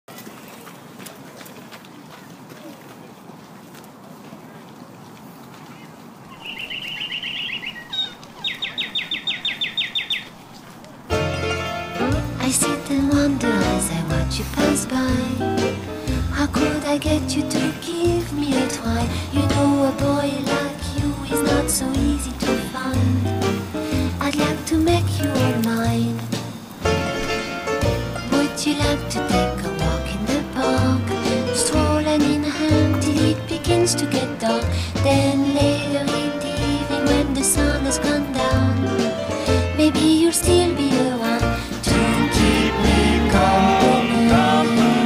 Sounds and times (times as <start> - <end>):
Walk, footsteps: 0.1 - 6.4.